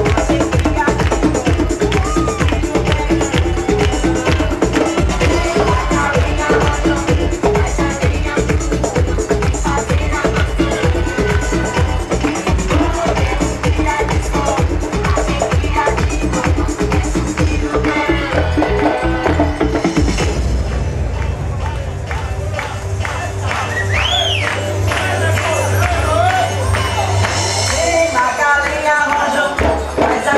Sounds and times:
Electronica: 0.0 - 30.3.

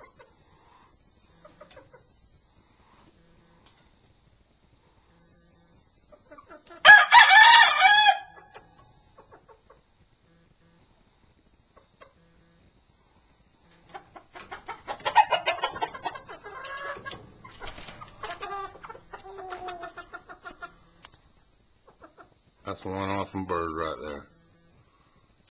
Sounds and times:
Speech: 22.6 - 24.3.

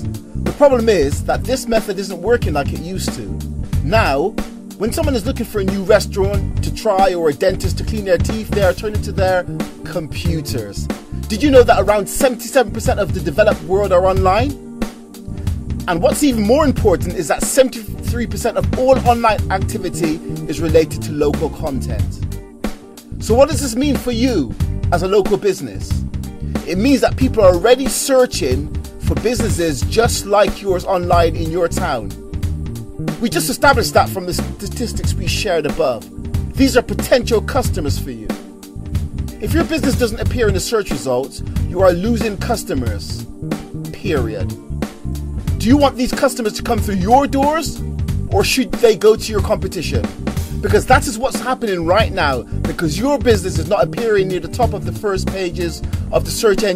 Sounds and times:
Music: 0.0 - 56.7
Speech: 0.5 - 14.6, 15.9 - 22.2, 23.2 - 26.0, 26.6 - 32.1, 33.2 - 38.4, 39.4 - 43.2, 43.9 - 44.5, 45.6 - 56.7.

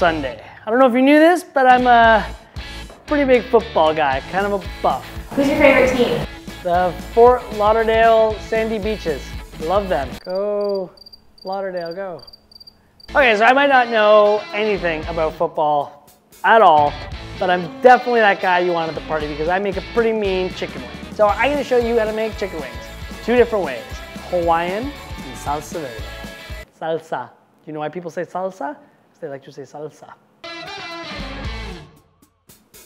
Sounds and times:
Music: 0.0 - 0.7, 1.6 - 10.2, 13.1 - 26.7, 30.4 - 32.8
Speech: 0.0 - 2.3, 3.1 - 10.9, 11.5 - 12.2, 13.2 - 26.0, 26.8 - 30.2.

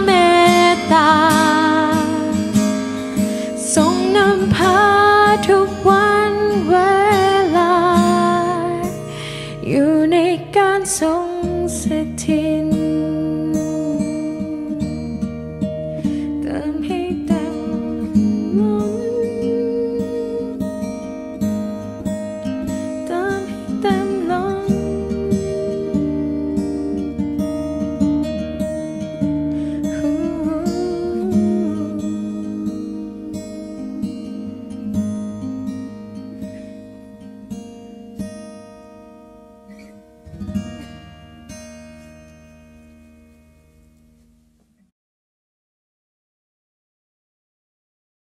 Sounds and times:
Acoustic guitar: 0.0 - 44.9.

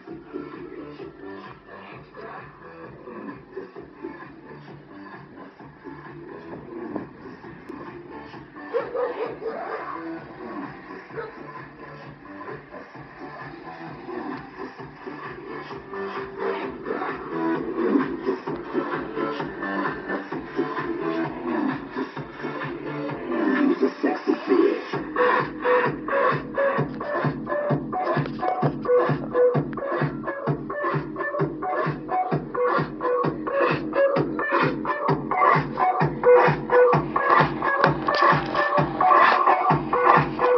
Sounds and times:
Music: 0.0 - 40.5.

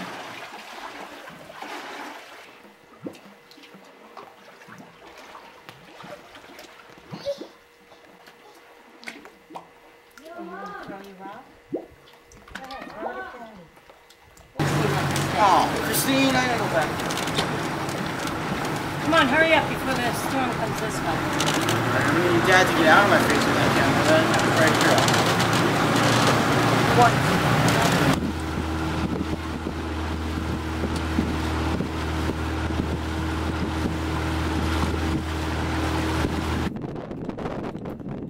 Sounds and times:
Motorboat, speedboat: 0.0 - 10.6, 14.6 - 38.3.

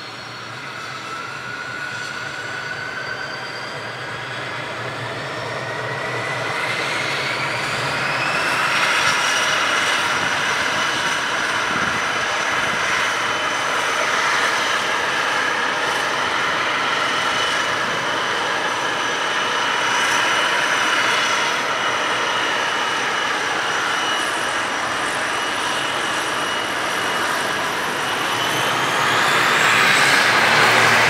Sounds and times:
Engine: 0.0 - 31.0
Vehicle: 0.0 - 31.0.

